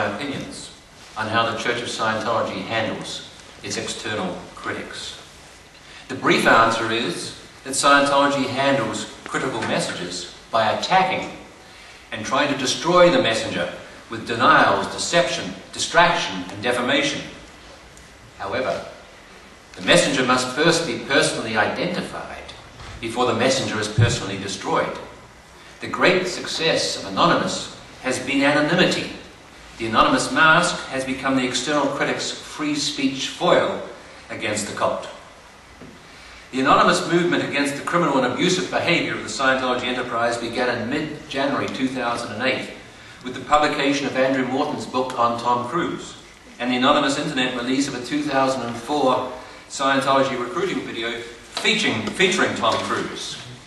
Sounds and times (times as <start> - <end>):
Male speech, man speaking: 0.0 - 5.3, 6.1 - 11.4, 12.1 - 17.4, 18.4 - 19.0, 19.8 - 25.1, 25.8 - 35.2, 36.6 - 53.6.